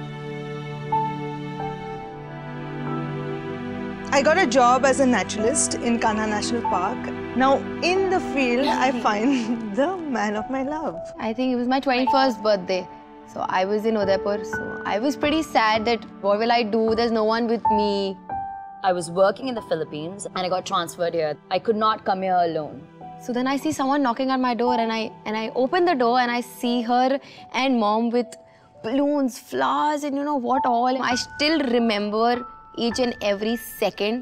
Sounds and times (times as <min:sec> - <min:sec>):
Music: 0:00.0 - 0:34.2.